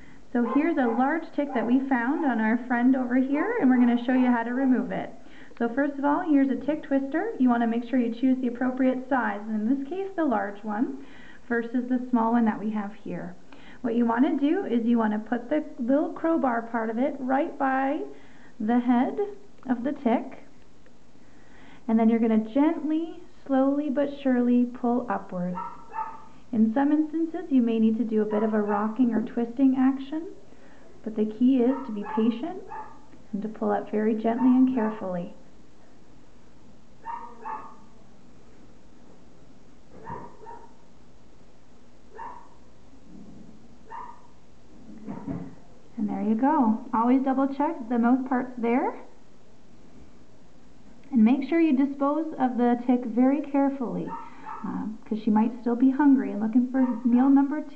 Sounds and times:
Speech: 0.3 - 20.5, 21.9 - 25.6, 26.5 - 30.4, 31.0 - 32.7, 33.3 - 35.4, 46.0 - 49.2, 51.1 - 57.7.

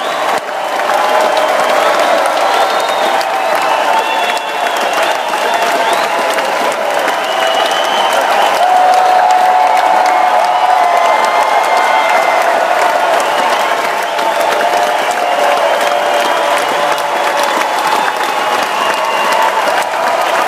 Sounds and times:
Applause: 0.0 - 20.4
Crowd: 0.0 - 20.4.

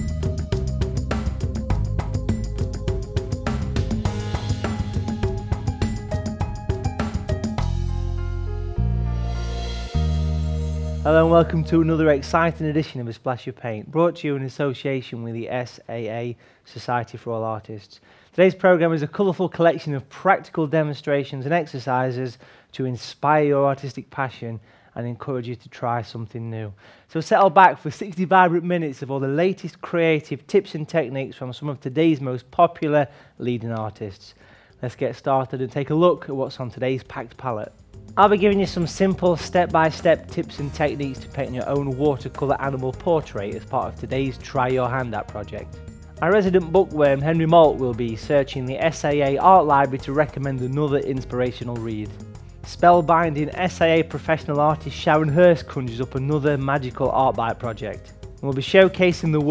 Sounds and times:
Speech: 11.0 - 59.5.

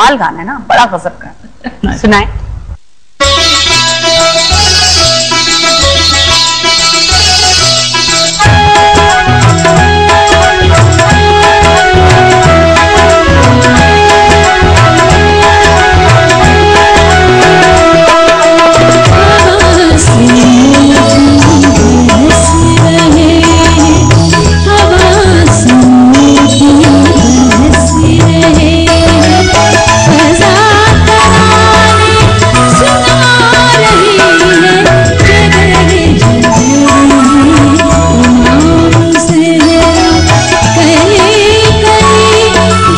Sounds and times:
Music: 3.2 - 42.9
Female singing: 19.1 - 42.9.

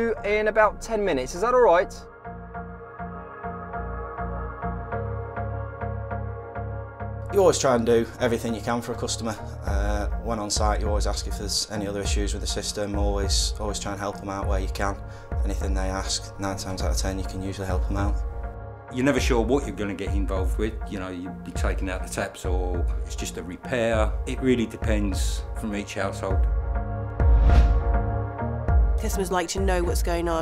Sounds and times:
Music: 0.0 - 30.4
Speech: 7.3 - 18.2, 18.9 - 26.4, 29.0 - 30.4.

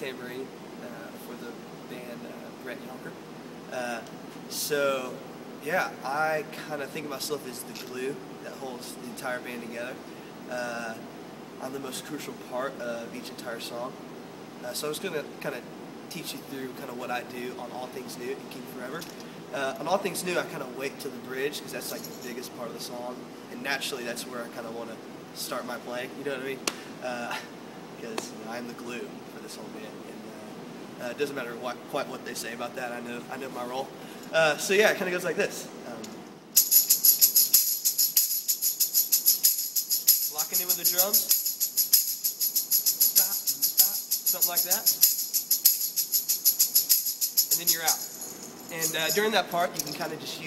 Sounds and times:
Speech: 0.0 - 14.0, 14.6 - 36.2, 40.3 - 41.3, 43.2 - 45.0, 47.5 - 48.1, 48.7 - 50.4.

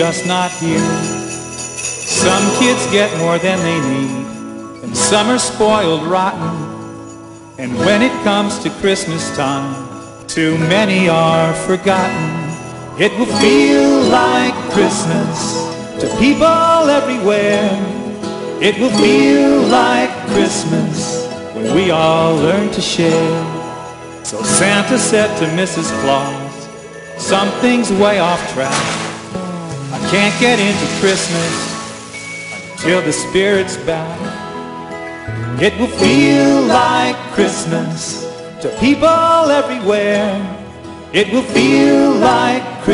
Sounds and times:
Music: 0.0 - 42.9.

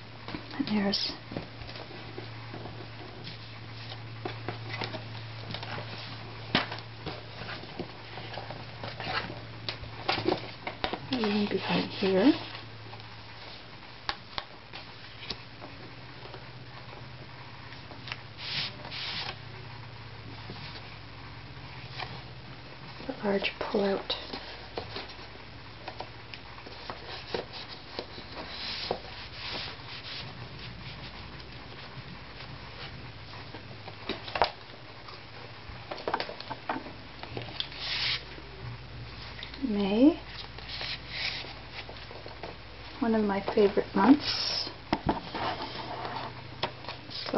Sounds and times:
Speech: 0.5 - 1.2, 11.1 - 12.5, 23.1 - 24.2, 39.6 - 40.2, 43.0 - 44.8.

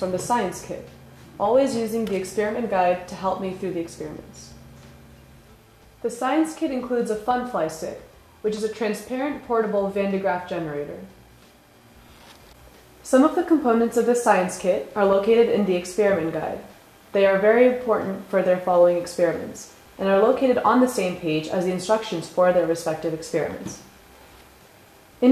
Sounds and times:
Speech: 0.0 - 4.6, 6.0 - 11.1, 13.0 - 23.9.

